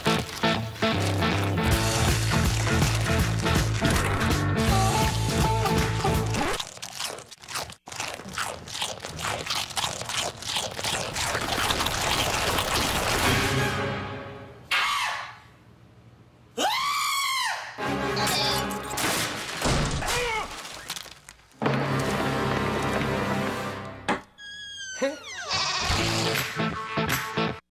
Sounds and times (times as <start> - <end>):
Music: 0.1 - 6.4, 13.3 - 14.6, 17.8 - 19.0, 21.6 - 24.1, 26.0 - 27.6
Bleat: 25.0 - 26.1.